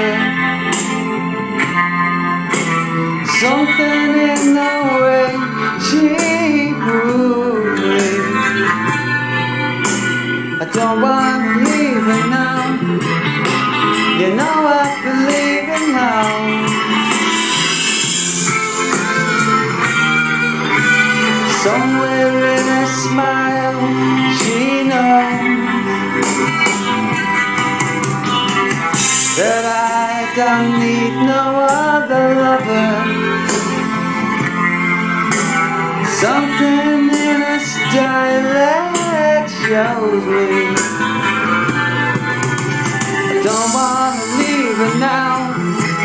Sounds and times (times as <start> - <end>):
Male singing: 0.0 - 0.4, 3.3 - 8.5, 10.6 - 13.0, 14.2 - 16.8, 21.5 - 25.9, 29.4 - 33.2, 36.1 - 40.9, 43.4 - 46.0
Music: 0.0 - 46.0.